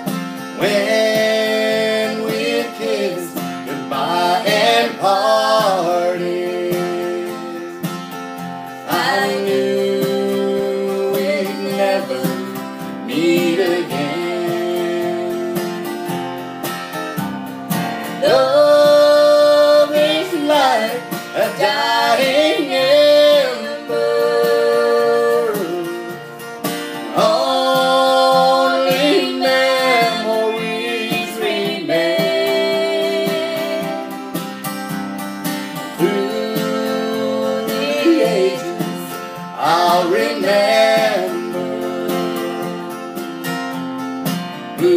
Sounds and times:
Music: 0.0 - 44.9.

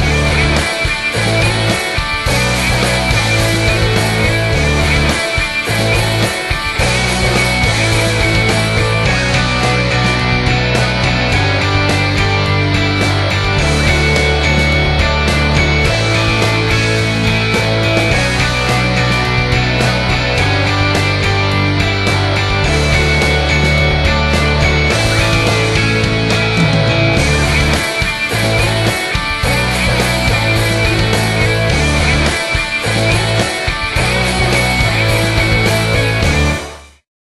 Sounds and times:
Music: 0.0 - 37.1.

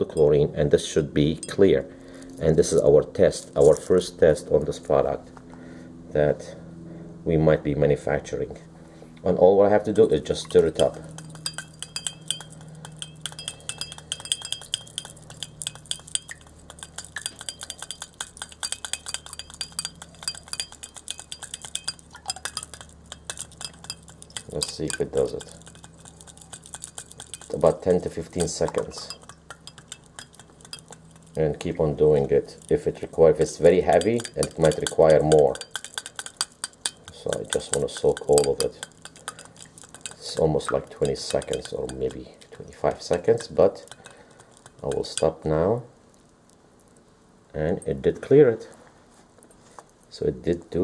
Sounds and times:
Speech: 0.0 - 5.3, 6.1 - 6.6, 7.3 - 11.0, 24.5 - 25.5, 27.5 - 29.2, 31.4 - 35.6, 37.1 - 38.9, 40.2 - 43.9, 44.8 - 45.9, 47.5 - 48.8, 50.1 - 50.8
Water: 10.0 - 31.4, 32.0 - 47.0.

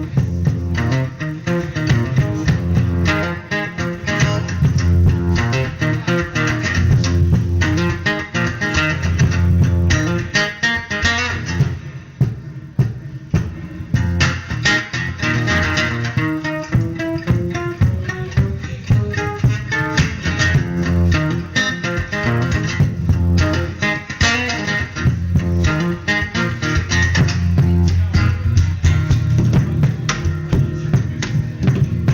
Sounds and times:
Acoustic guitar: 0.0 - 32.1.

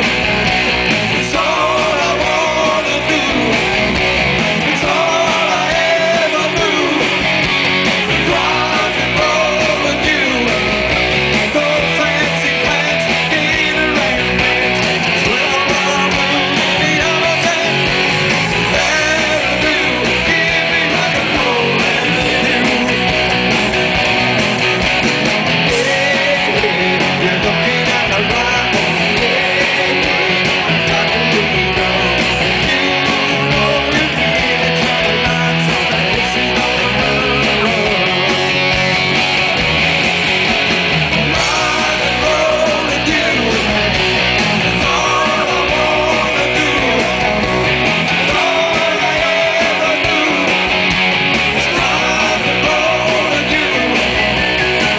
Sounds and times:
Music: 0.0 - 54.9.

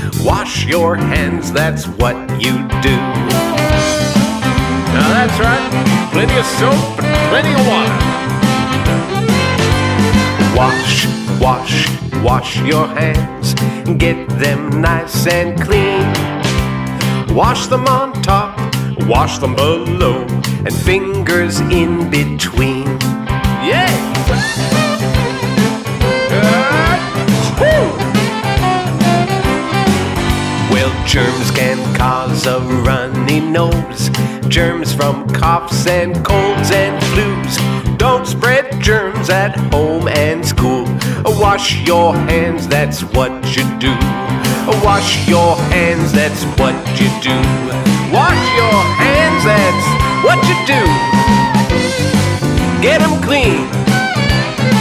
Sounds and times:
Music for children: 0.0 - 35.6, 36.2 - 54.8
Singing: 4.9 - 7.9, 10.5 - 13.2, 26.3 - 27.8, 30.7 - 33.9, 44.7 - 51.7.

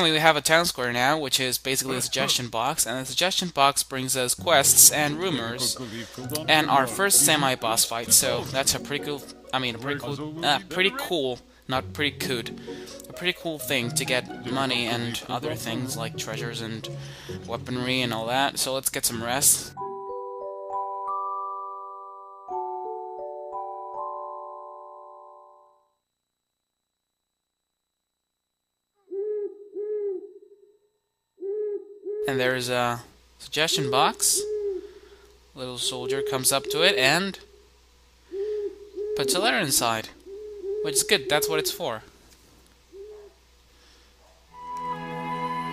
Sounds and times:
Speech: 0.0 - 16.9, 17.5 - 19.8, 32.3 - 34.5, 35.6 - 37.4, 39.2 - 40.2, 40.9 - 42.1
Music: 4.5 - 18.6, 19.4 - 25.8, 44.6 - 45.7.

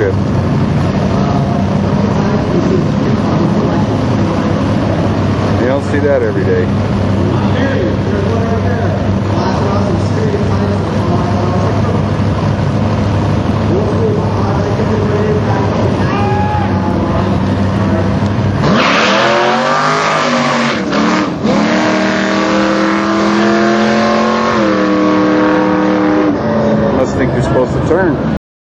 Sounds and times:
Car: 0.0 - 28.4
Speech: 5.6 - 6.7, 7.3 - 12.1, 13.7 - 18.2, 27.0 - 28.3.

